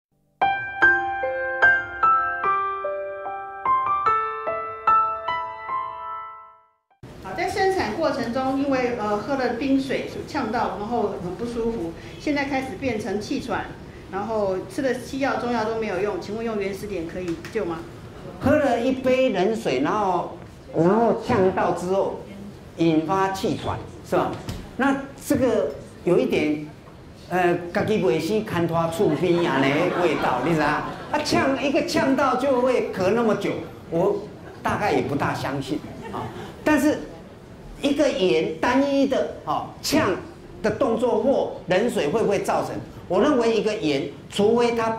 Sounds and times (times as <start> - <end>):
Music: 0.3 - 7.0
Female speech, woman speaking: 7.3 - 13.2.